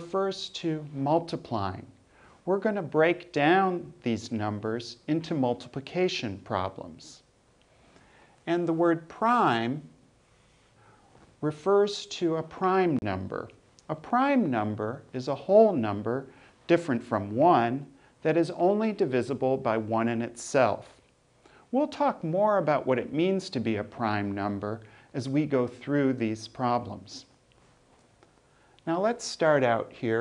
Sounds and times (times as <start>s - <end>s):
Speech: 0.0s - 7.3s, 8.4s - 10.0s, 11.4s - 21.0s, 21.7s - 27.4s, 28.8s - 30.2s.